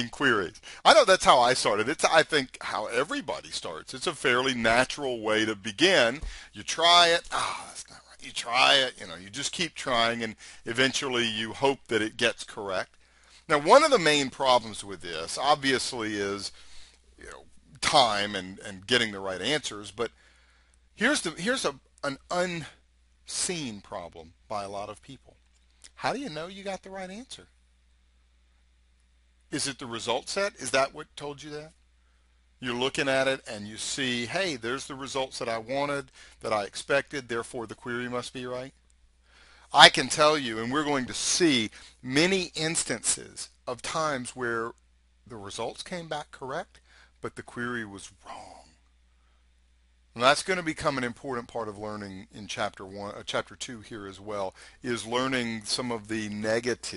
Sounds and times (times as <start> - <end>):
Speech: 0.0 - 12.9, 13.5 - 16.6, 17.2 - 20.1, 21.0 - 25.3, 25.9 - 27.5, 29.5 - 31.8, 32.6 - 38.7, 39.7 - 48.8, 50.2 - 56.9.